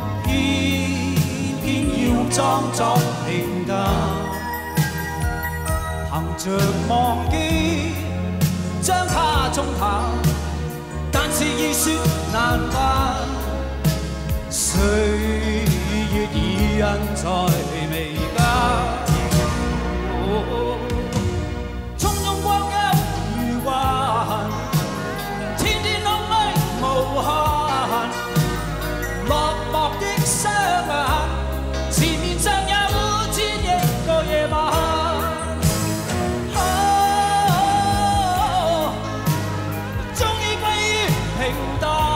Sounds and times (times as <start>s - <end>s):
Singing: 0.0s - 4.4s, 36.5s - 39.4s
Music of Asia: 0.0s - 42.1s.